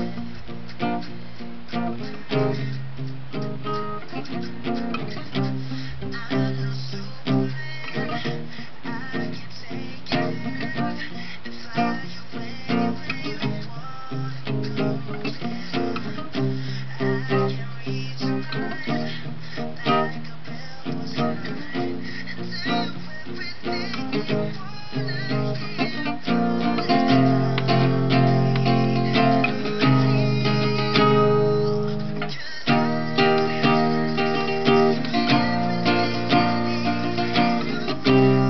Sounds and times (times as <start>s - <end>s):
Acoustic guitar: 0.0s - 38.4s
Strum: 20.8s - 38.4s.